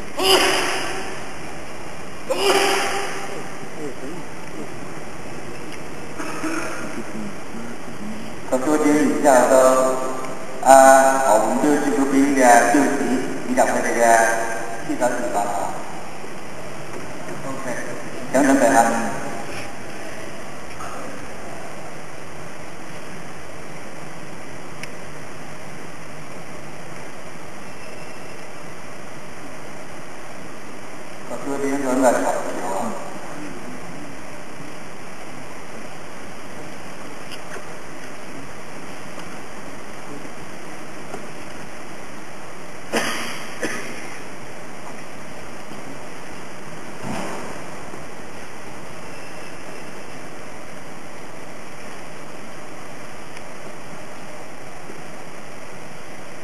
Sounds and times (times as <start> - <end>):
White noise: 0.0 - 56.4.